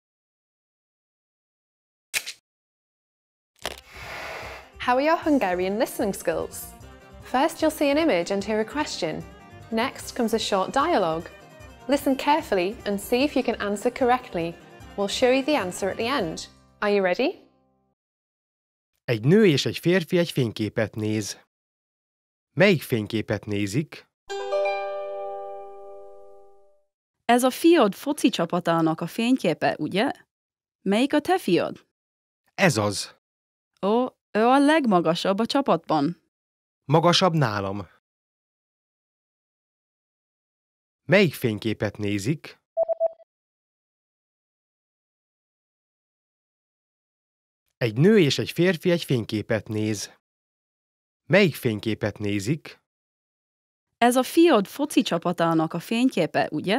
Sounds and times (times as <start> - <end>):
Music: 4.4 - 18.0, 24.3 - 26.8
Speech: 4.8 - 6.7, 7.3 - 11.3, 11.9 - 17.4, 19.1 - 21.5, 22.6 - 24.1, 27.3 - 30.2, 30.9 - 31.8, 32.6 - 33.2, 33.8 - 36.2, 36.9 - 38.0, 41.1 - 42.6, 47.8 - 50.2, 51.3 - 52.8, 54.0 - 56.7.